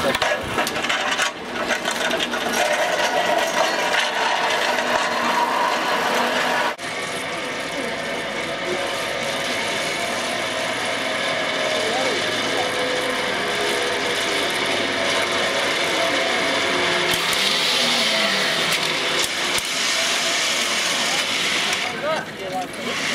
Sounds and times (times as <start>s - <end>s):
Speech: 11.8s - 13.0s, 20.9s - 23.1s.